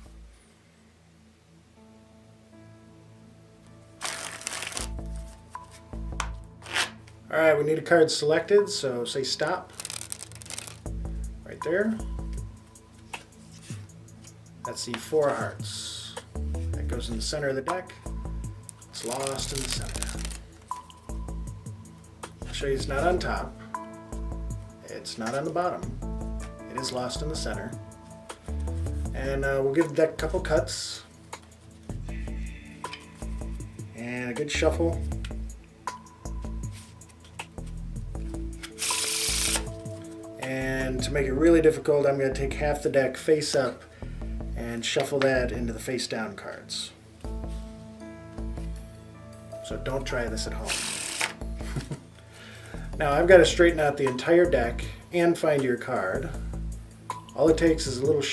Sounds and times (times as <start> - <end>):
Music: 0.0 - 58.3
Speech: 7.3 - 9.6, 16.8 - 17.9, 22.5 - 23.5, 24.8 - 25.9, 26.7 - 27.8, 29.2 - 31.1, 34.0 - 35.0, 40.4 - 43.8, 44.6 - 47.0, 49.6 - 50.8, 53.0 - 56.4, 57.4 - 58.3.